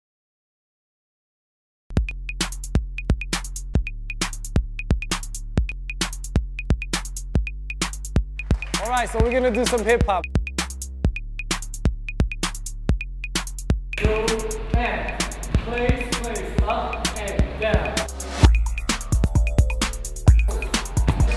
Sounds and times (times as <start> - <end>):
Drum machine: 1.9 - 21.3
Speech: 8.8 - 10.3, 14.0 - 18.1.